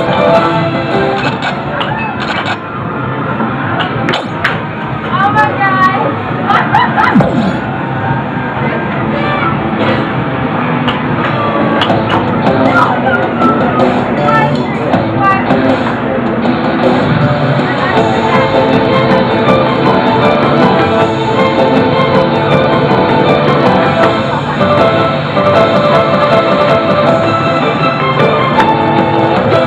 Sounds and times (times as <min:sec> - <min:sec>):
Music: 0:00.0 - 0:03.0, 0:07.1 - 0:29.6.